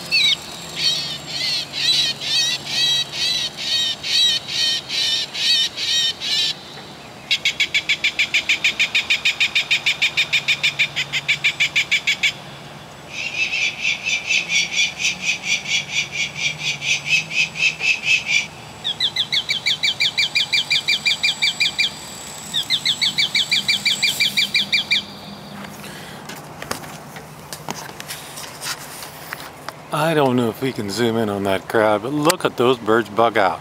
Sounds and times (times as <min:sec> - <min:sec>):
Bird: 0:00.0 - 0:26.0.